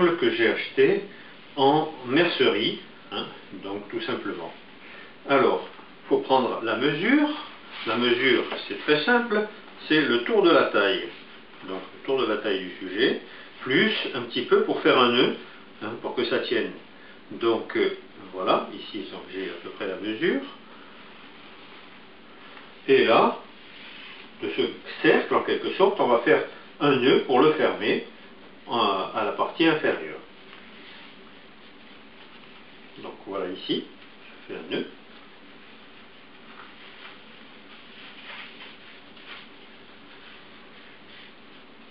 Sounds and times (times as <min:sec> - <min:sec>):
Speech: 0:00.0 - 0:04.6, 0:05.2 - 0:20.6, 0:22.8 - 0:23.5, 0:24.4 - 0:30.3, 0:33.0 - 0:35.0.